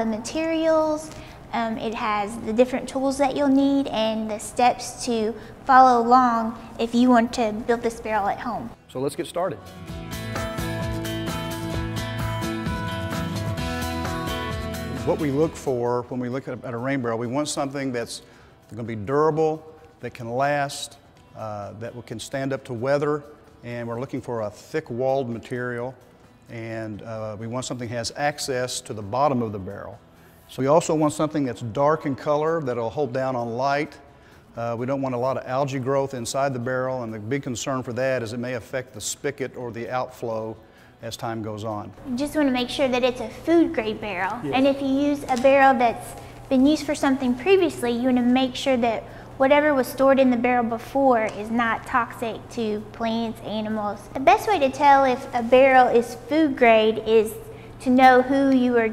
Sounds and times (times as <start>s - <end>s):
Music: 0.0s - 58.9s.